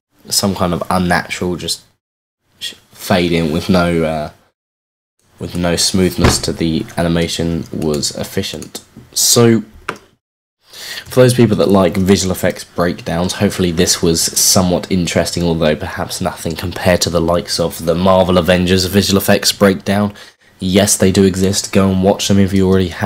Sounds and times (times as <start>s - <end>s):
Inside, small room: 0.1s - 4.6s, 5.2s - 23.0s
Speech: 0.2s - 2.0s, 2.6s - 4.5s, 5.4s - 9.8s, 10.8s - 23.0s.